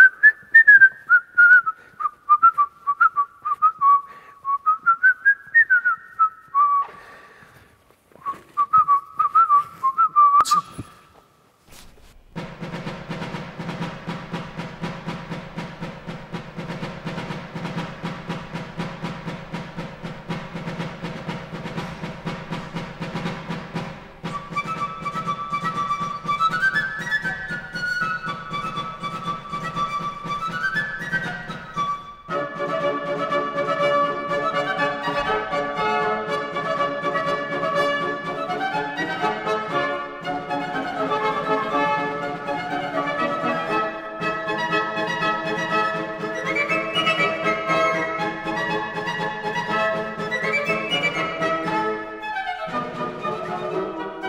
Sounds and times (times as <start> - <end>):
Music: 11.8 - 54.2.